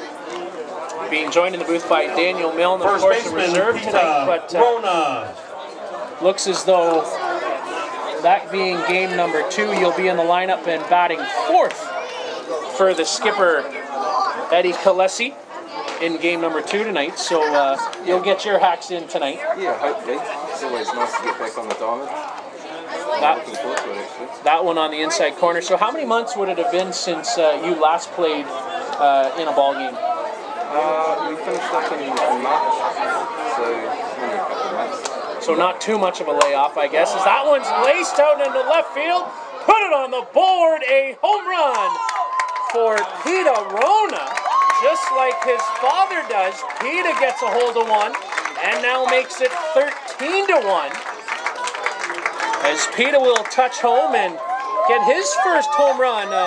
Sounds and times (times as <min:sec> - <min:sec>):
Speech: 0:12.6 - 0:42.1, 0:42.7 - 0:51.0, 0:52.6 - 0:56.4.